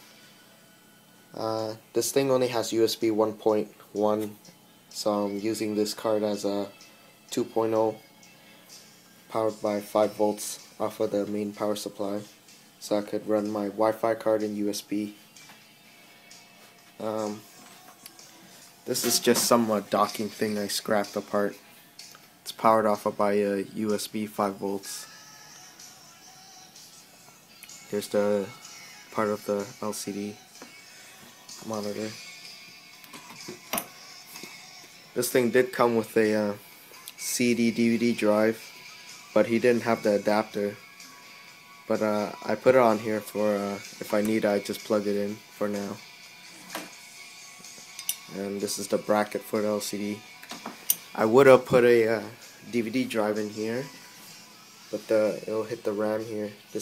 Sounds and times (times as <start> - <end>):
Inside, small room: 0.0 - 56.8
Music: 0.0 - 56.8
Speech: 1.4 - 4.4, 5.0 - 6.7, 7.3 - 8.0, 9.3 - 15.2, 17.0 - 17.4, 18.9 - 21.6, 22.5 - 25.0, 27.9 - 28.5, 29.2 - 30.4, 31.6 - 32.2, 35.2 - 36.6, 37.2 - 38.6, 39.4 - 40.8, 41.9 - 46.0, 48.3 - 50.2, 51.2 - 53.9, 55.0 - 56.8.